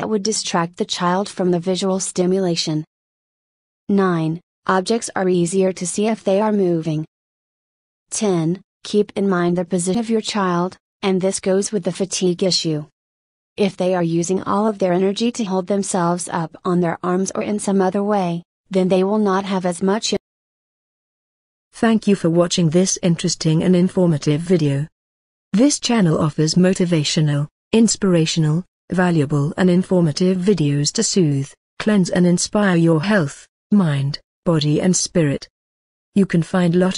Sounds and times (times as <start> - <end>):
Speech: 0.0 - 2.9, 3.9 - 7.1, 8.1 - 12.9, 13.6 - 20.2, 21.8 - 24.9, 25.6 - 35.5, 36.2 - 36.9.